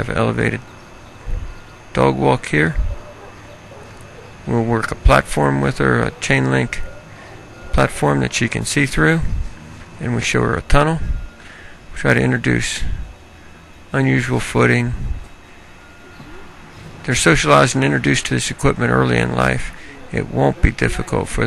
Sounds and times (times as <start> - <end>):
Speech: 0.0 - 0.6, 1.9 - 2.9, 4.5 - 6.9, 7.7 - 9.4, 10.0 - 11.1, 12.0 - 13.0, 14.0 - 15.1, 17.1 - 21.4.